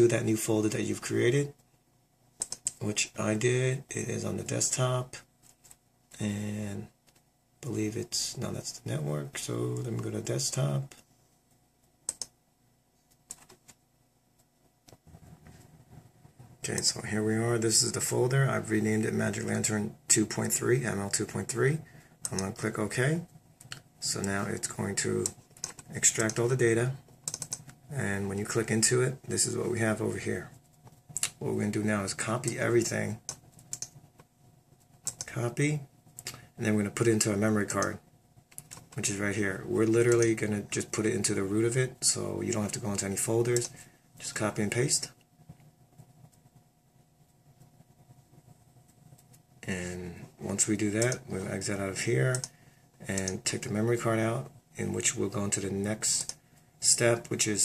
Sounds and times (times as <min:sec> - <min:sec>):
Speech: 0:00.0 - 0:01.6, 0:02.8 - 0:05.3, 0:06.2 - 0:07.0, 0:07.6 - 0:11.0, 0:16.6 - 0:23.3, 0:24.0 - 0:27.0, 0:27.9 - 0:30.6, 0:31.2 - 0:33.3, 0:35.2 - 0:35.9, 0:36.6 - 0:38.0, 0:39.0 - 0:45.2, 0:49.6 - 0:57.6.